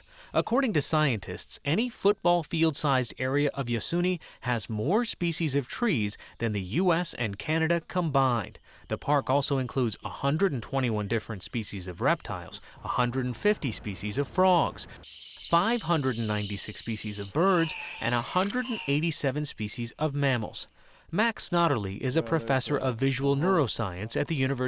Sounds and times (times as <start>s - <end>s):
Speech: 0.4s - 14.9s, 15.6s - 24.6s.